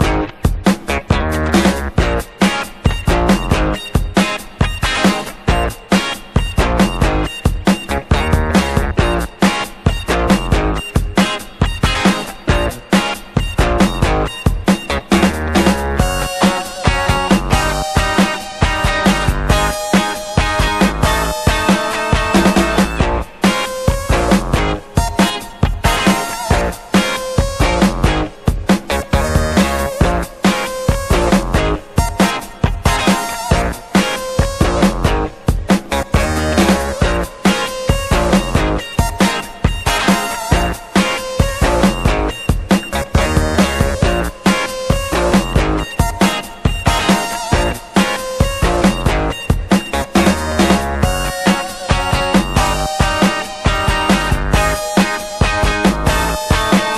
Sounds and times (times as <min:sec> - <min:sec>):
Music: 0:00.0 - 0:56.9.